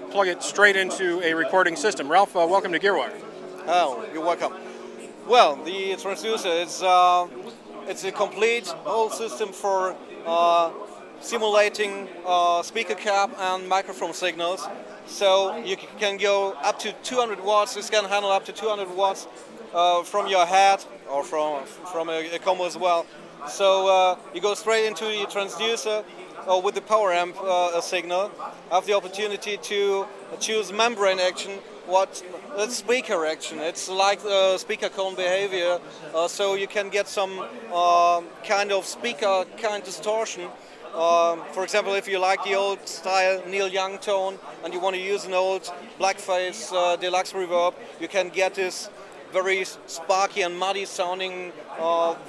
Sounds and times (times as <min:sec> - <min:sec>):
Speech: 0:00.0 - 0:52.2.